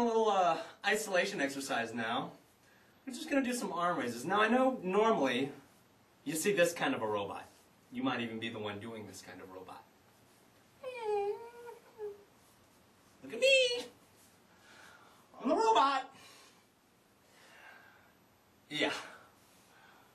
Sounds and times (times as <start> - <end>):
Speech: 0.0 - 2.4, 3.1 - 5.6, 6.3 - 9.9, 13.2 - 14.0, 15.4 - 16.2, 18.7 - 19.2.